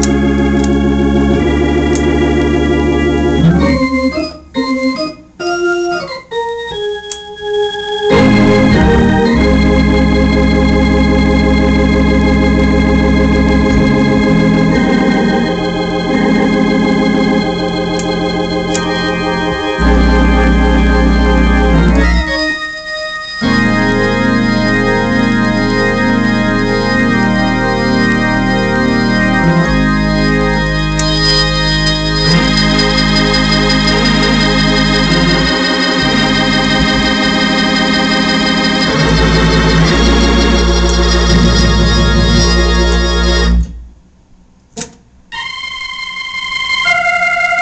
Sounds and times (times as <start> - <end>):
Hammond organ: 0.0 - 43.8, 45.3 - 47.6.